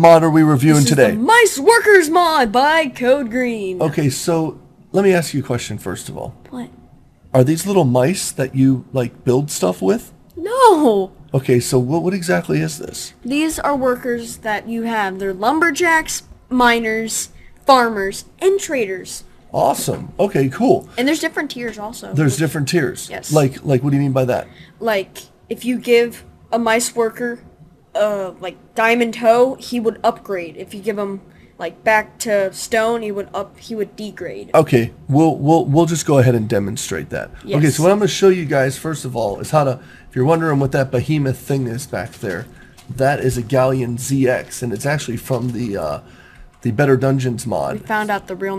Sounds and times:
Speech: 0.0s - 6.7s, 7.4s - 25.0s, 28.0s - 46.0s, 46.6s - 48.5s.

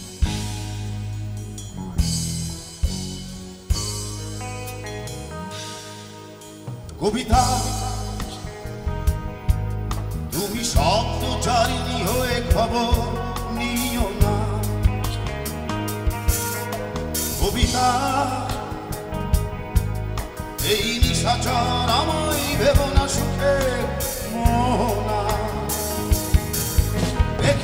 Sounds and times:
Blues: 0.0s - 27.6s.

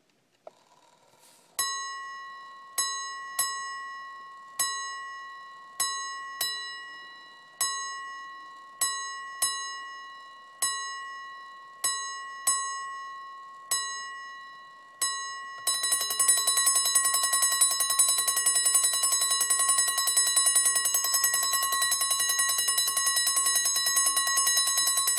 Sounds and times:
Alarm clock: 1.6s - 25.1s.

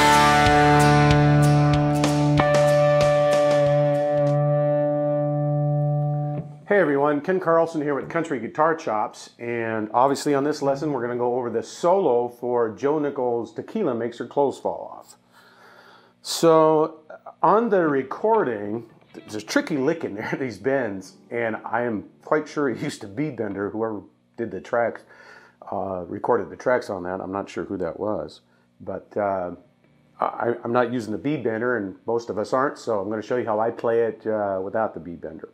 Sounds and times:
Speech: 6.7s - 15.2s, 16.2s - 29.6s, 30.2s - 35.5s.

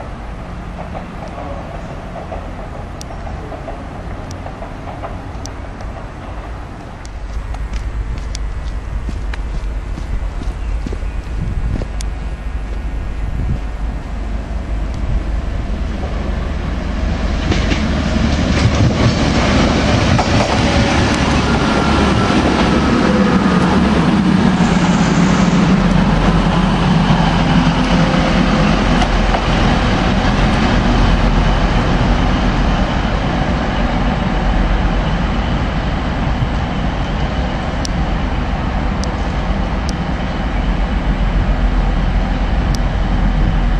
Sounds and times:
Subway, metro, underground: 0.0s - 10.0s, 10.6s - 43.7s
Railroad car, train wagon: 0.0s - 43.7s
Train: 0.0s - 43.7s
Clickety-clack: 0.8s - 6.6s, 17.4s - 21.4s.

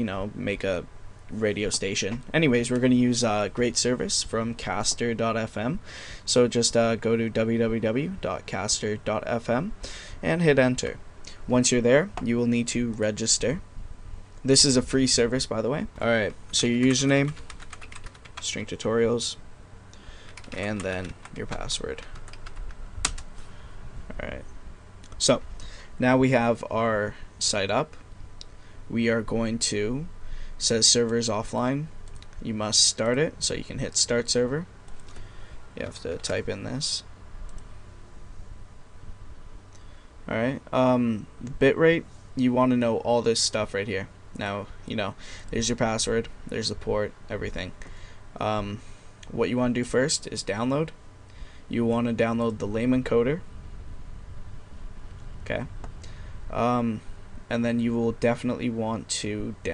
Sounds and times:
Speech: 0.0s - 13.7s, 14.4s - 17.4s, 18.4s - 19.4s, 20.5s - 22.1s, 24.1s - 24.5s, 25.2s - 25.4s, 26.0s - 28.0s, 28.9s - 34.7s, 35.8s - 37.1s, 40.3s - 47.8s, 48.4s - 51.0s, 51.7s - 53.5s, 55.4s - 55.7s, 56.5s - 59.7s.

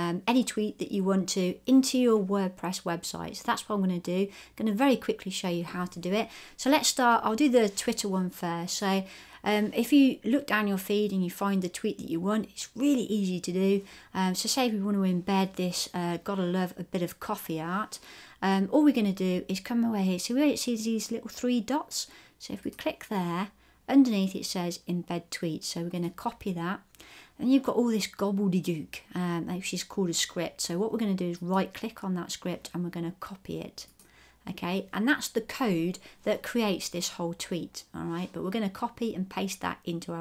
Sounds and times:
Speech: 0.0s - 26.8s, 27.4s - 40.2s.

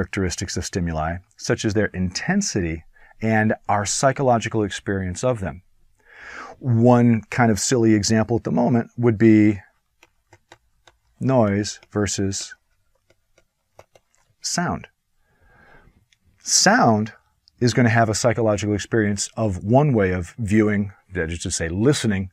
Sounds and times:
Writing: 9.2s - 14.6s.

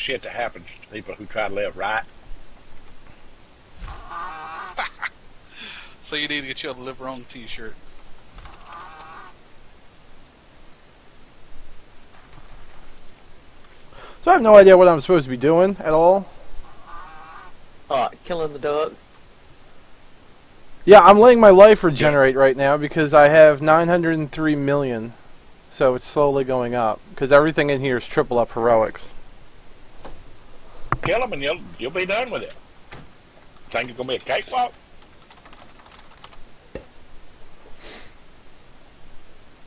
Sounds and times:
Speech: 0.0s - 2.1s, 6.0s - 7.8s, 14.2s - 16.3s, 17.9s - 19.0s, 20.8s - 29.2s, 31.0s - 32.6s, 33.7s - 34.8s.

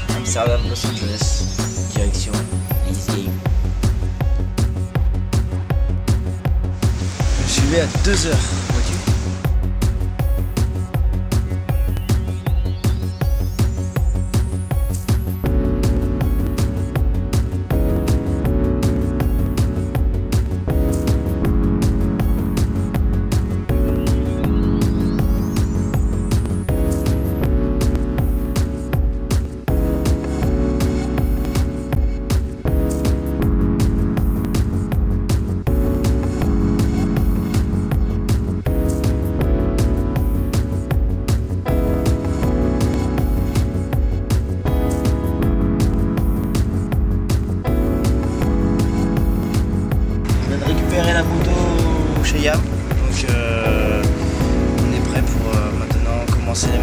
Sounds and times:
Music: 0.0s - 56.8s.

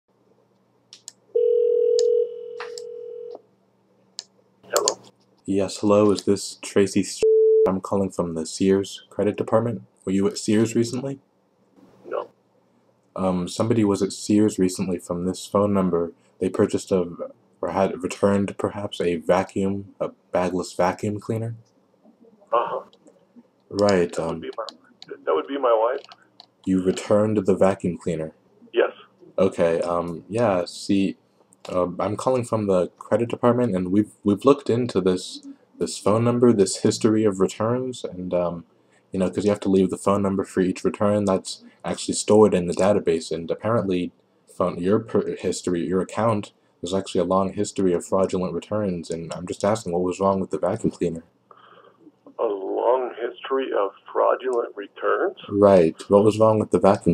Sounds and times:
Speech: 4.7s - 11.2s, 13.1s - 21.6s, 22.5s - 22.9s, 23.7s - 51.3s, 52.3s - 57.1s
Busy signal: 7.2s - 7.7s.

